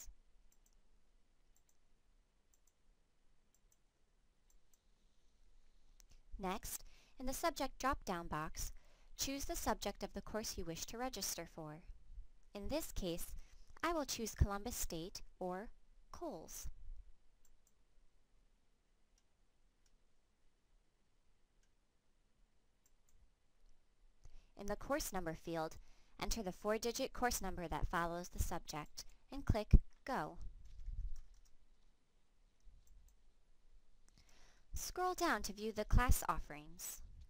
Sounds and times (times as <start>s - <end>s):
Speech: 6.4s - 11.9s, 12.6s - 16.7s, 24.6s - 30.4s, 34.8s - 37.0s.